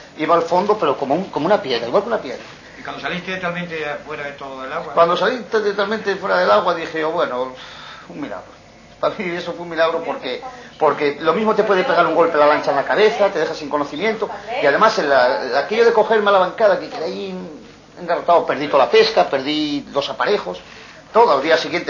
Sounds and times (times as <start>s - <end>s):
Speech: 0.2s - 8.4s.